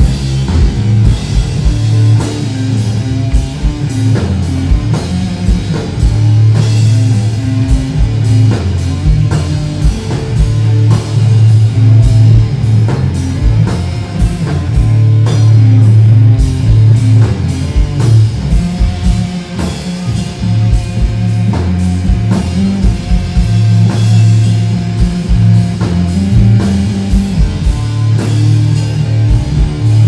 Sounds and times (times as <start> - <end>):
Drum kit: 0.0 - 30.0
Heavy metal: 0.0 - 30.0.